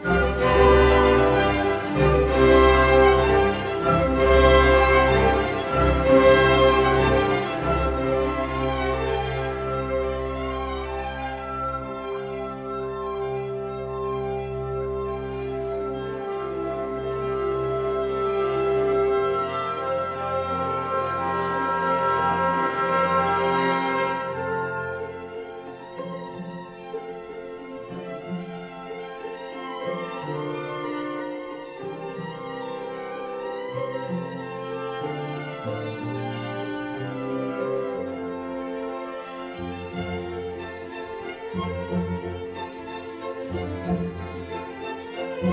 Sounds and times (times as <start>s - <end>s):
Violin, fiddle: 0.0s - 45.5s.